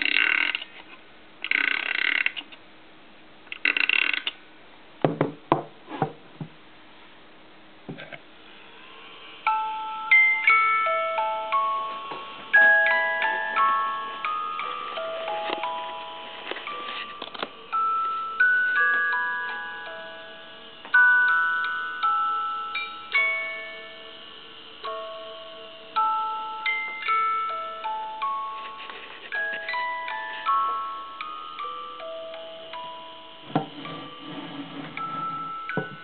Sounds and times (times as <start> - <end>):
Music: 9.4 - 36.0.